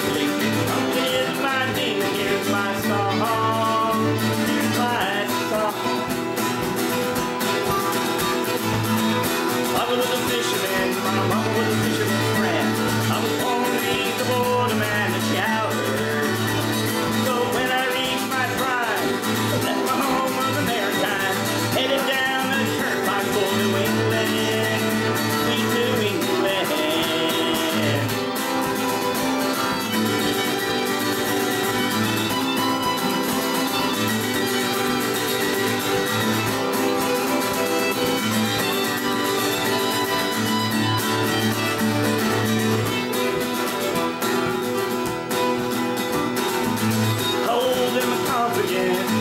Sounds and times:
Male singing: 0:00.0 - 0:06.2, 0:09.6 - 0:28.3, 0:47.4 - 0:49.2
Music: 0:00.0 - 0:49.2.

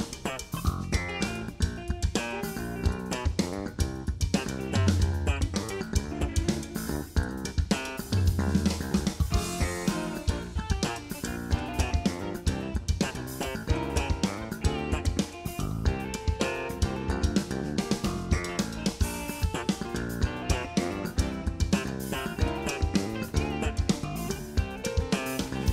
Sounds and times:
Drum kit: 0:00.0 - 0:25.7.

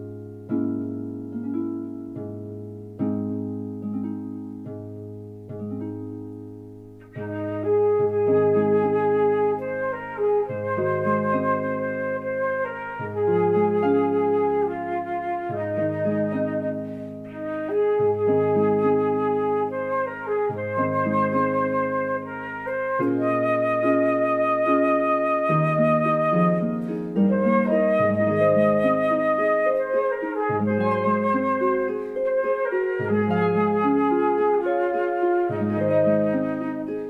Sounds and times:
Flute: 0:07.0 - 0:37.1.

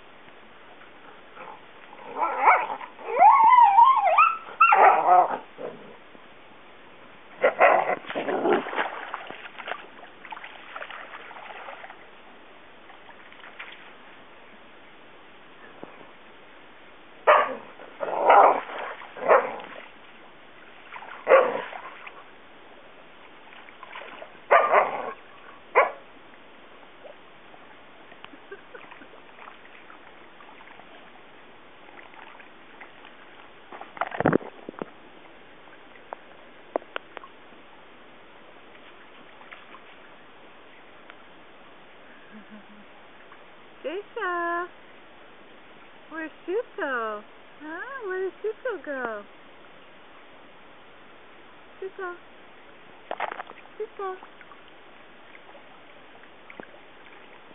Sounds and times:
Bow-wow: 0:01.4 - 0:05.4, 0:07.4 - 0:08.6, 0:17.3 - 0:19.6, 0:21.2 - 0:21.8, 0:24.5 - 0:26.0.

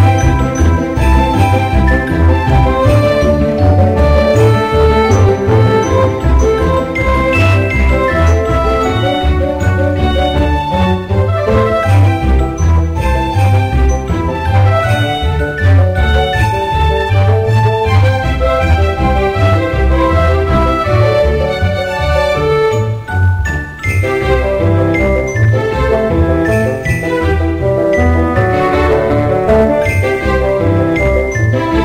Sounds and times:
Soundtrack music: 0:00.0 - 0:31.8.

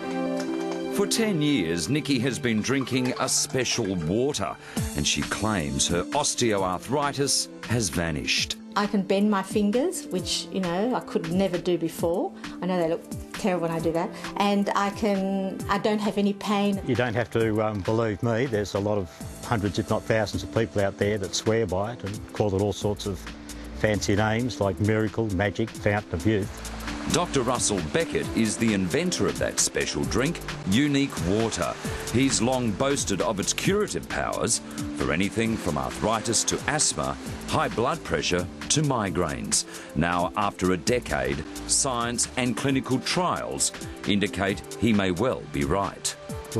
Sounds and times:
Music: 0:00.0 - 0:46.5
Speech: 0:01.0 - 0:23.2, 0:23.8 - 0:26.5, 0:27.1 - 0:46.5.

